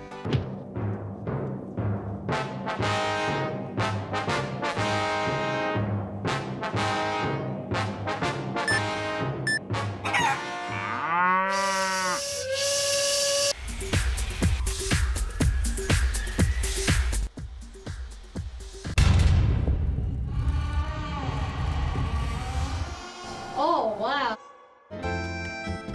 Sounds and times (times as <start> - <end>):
Music: 0.0 - 11.0, 12.7 - 20.1, 22.6 - 25.9
Speech: 23.6 - 24.4.